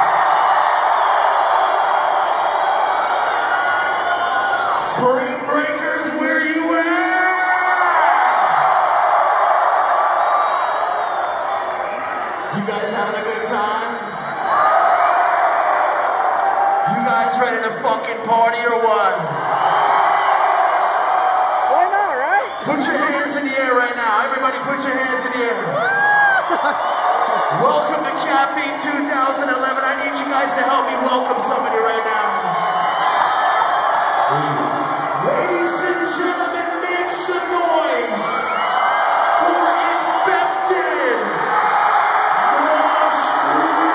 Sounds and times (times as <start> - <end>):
Speech: 4.8 - 8.1, 12.5 - 14.0, 16.9 - 19.3, 21.7 - 25.9, 27.5 - 32.6, 34.3 - 38.6, 39.4 - 41.4, 42.4 - 43.9.